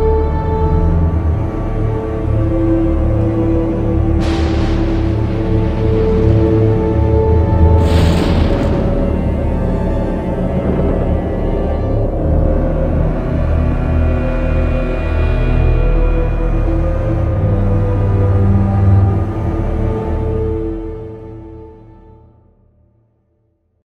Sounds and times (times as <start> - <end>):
Music: 0.0 - 23.8.